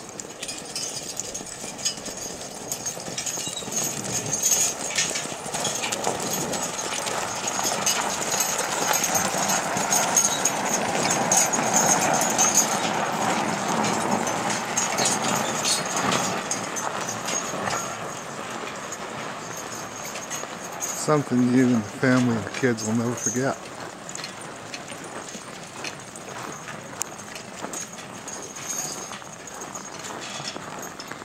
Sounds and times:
Clip-clop: 0.0s - 31.2s.

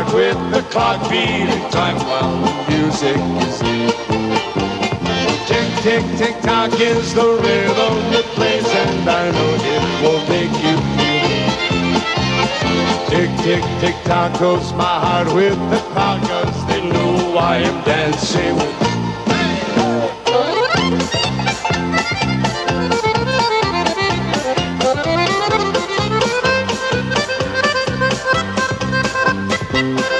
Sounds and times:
Music: 0.0s - 30.1s.

